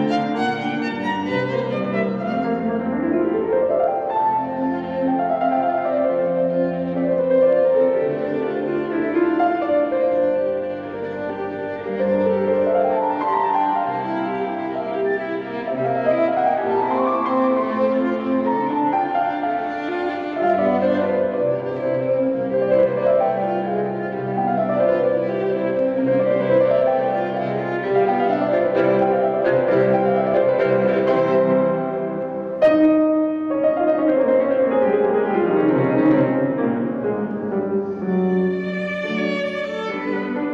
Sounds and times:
Violin, fiddle: 0.0 - 33.4, 34.5 - 40.5.

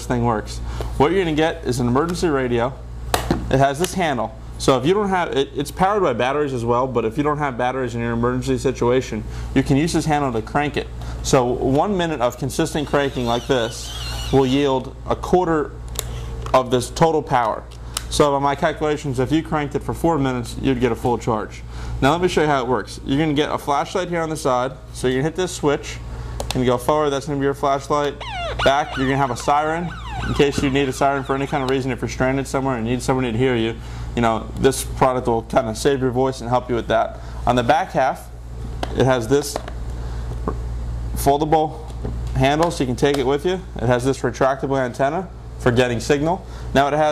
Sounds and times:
Speech: 0.0 - 2.8, 3.5 - 15.8, 16.5 - 39.7, 41.2 - 47.1.

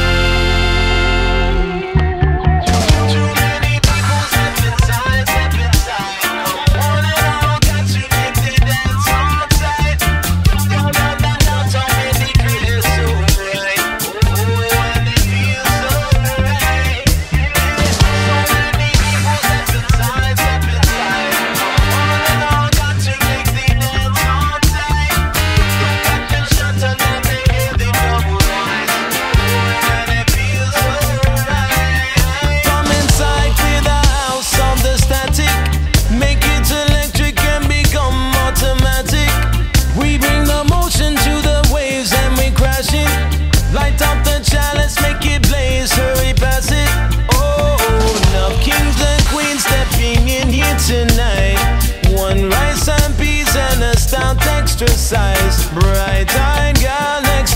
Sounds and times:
Singing: 2.0 - 43.1, 43.7 - 57.5.

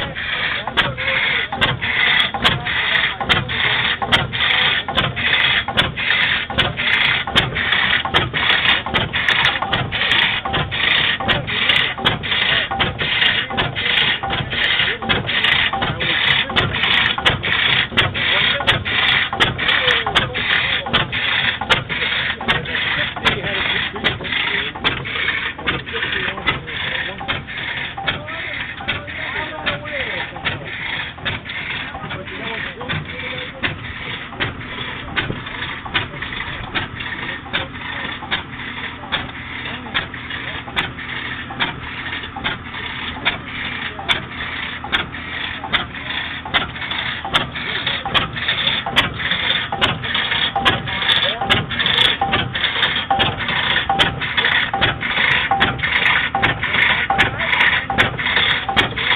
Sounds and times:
Speech: 0.0 - 5.8, 8.6 - 41.0, 42.4 - 59.1
Idling: 0.0 - 59.1
Medium engine (mid frequency): 0.0 - 59.1.

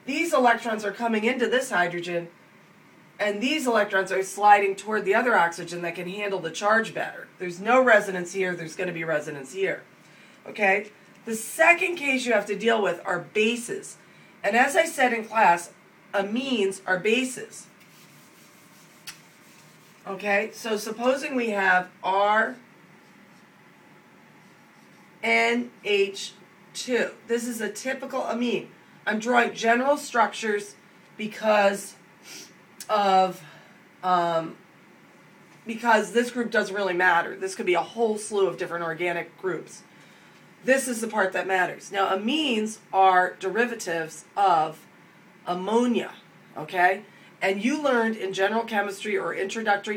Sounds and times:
Speech: 0.0 - 2.4, 3.2 - 17.8, 20.0 - 22.7, 25.2 - 32.0, 32.8 - 34.6, 35.6 - 39.9, 40.6 - 49.9.

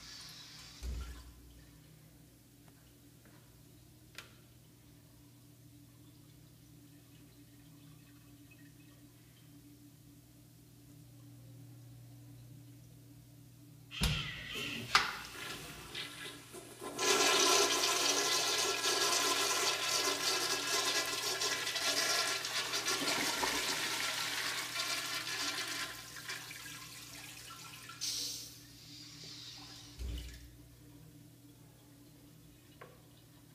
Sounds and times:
Water: 0.0 - 13.4, 22.5 - 33.5
Toilet flush: 14.0 - 30.5.

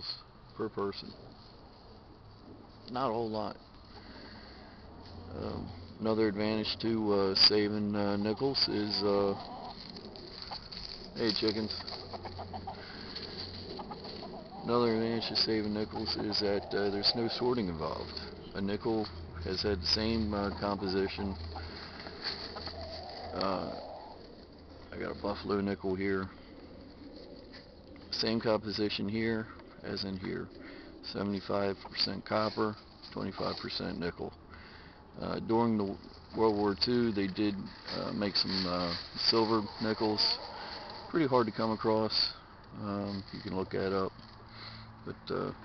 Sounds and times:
Speech: 0.0 - 1.2, 2.9 - 3.6, 5.3 - 9.4, 11.2 - 11.8, 14.6 - 21.4, 23.3 - 23.8, 24.9 - 26.3, 28.1 - 34.4, 35.2 - 40.4, 41.1 - 44.2, 45.0 - 45.6.

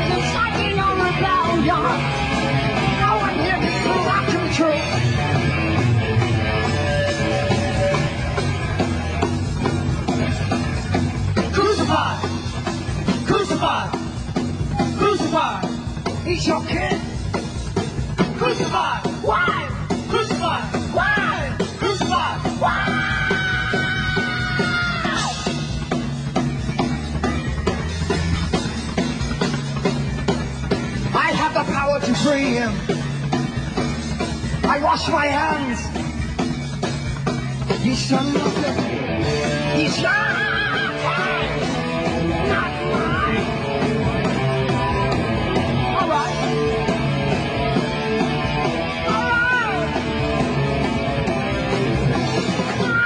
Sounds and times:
Music: 0.0 - 53.0.

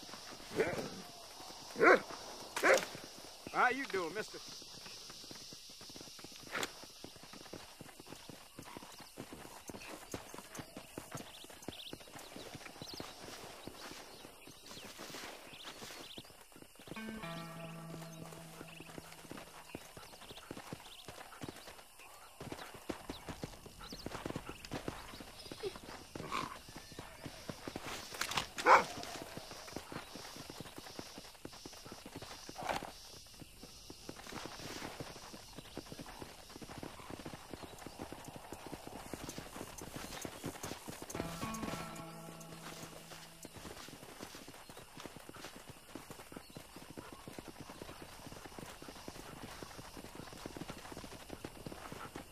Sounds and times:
Bow-wow: 1.8 - 2.0, 2.6 - 2.9, 28.6 - 29.0.

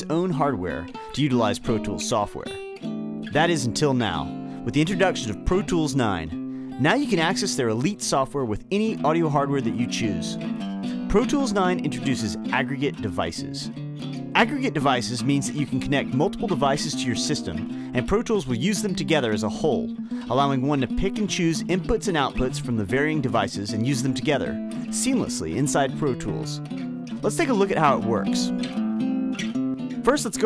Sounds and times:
Speech: 0.0 - 2.6, 3.3 - 10.4, 11.1 - 13.7, 14.4 - 26.6, 27.2 - 28.6, 30.0 - 30.4
Music: 0.0 - 30.4.

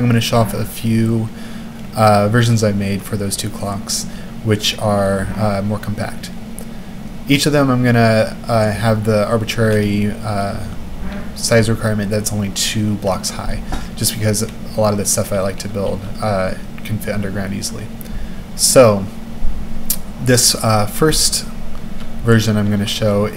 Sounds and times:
Speech: 0.0 - 6.4, 7.3 - 10.8, 11.4 - 18.0, 18.6 - 19.2, 20.2 - 21.6, 22.2 - 23.3.

